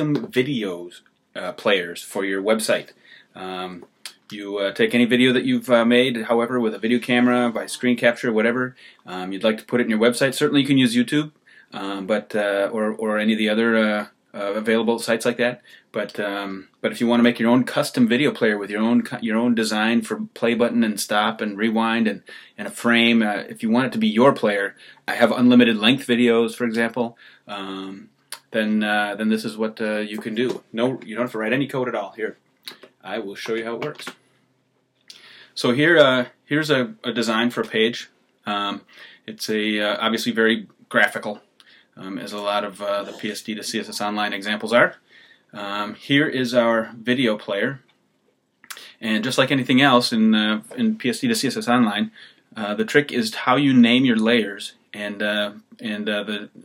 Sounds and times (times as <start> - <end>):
Speech: 0.0 - 34.2, 35.6 - 41.4, 42.0 - 47.9, 48.7 - 56.6.